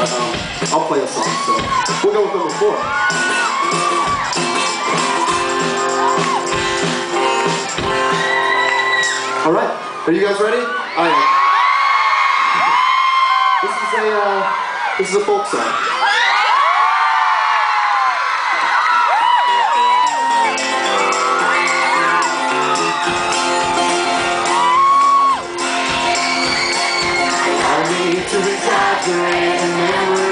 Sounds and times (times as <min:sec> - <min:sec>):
Percussion: 0:00.0 - 0:09.4, 0:19.1 - 0:30.3.